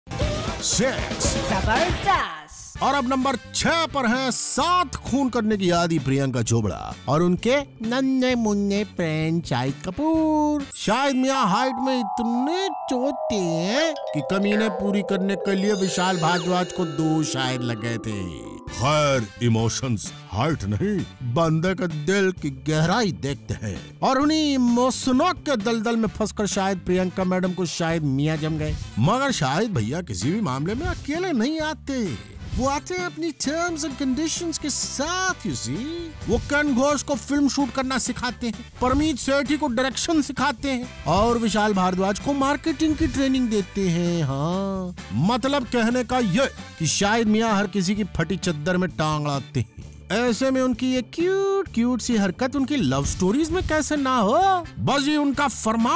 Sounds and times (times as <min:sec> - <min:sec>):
Music: 0:00.1 - 0:55.9
Speech: 0:00.6 - 0:55.9.